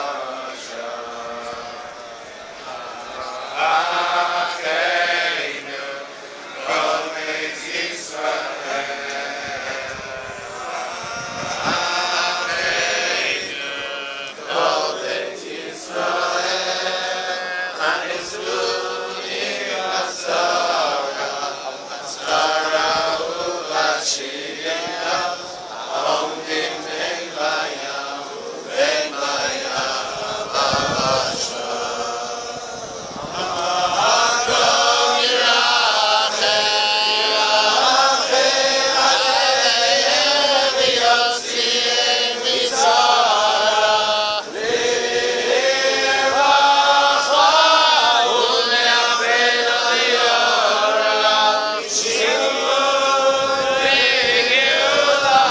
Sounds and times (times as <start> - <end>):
Choir: 0.0 - 55.5
Male singing: 10.6 - 55.5.